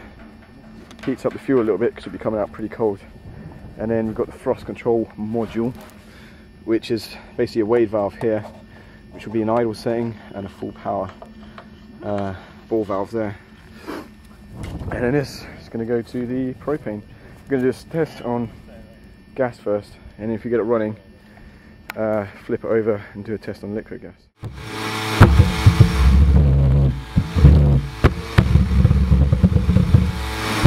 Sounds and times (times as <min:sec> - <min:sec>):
Outside, rural or natural: 0:00.0 - 0:23.8, 0:24.4 - 0:30.6
Speech: 0:01.0 - 0:03.1, 0:03.8 - 0:05.8, 0:06.7 - 0:08.6, 0:09.2 - 0:11.2, 0:12.0 - 0:13.4, 0:14.9 - 0:21.2, 0:21.9 - 0:24.3.